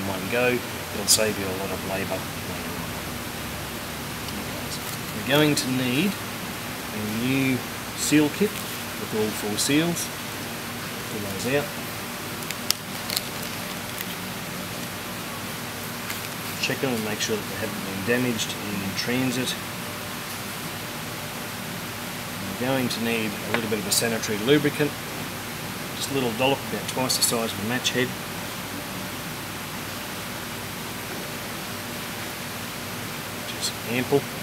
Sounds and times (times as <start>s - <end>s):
Speech: 0.0s - 3.0s, 4.3s - 6.2s, 6.9s - 10.1s, 11.1s - 11.7s, 16.6s - 19.6s, 22.4s - 25.0s, 26.0s - 28.2s, 33.5s - 34.4s.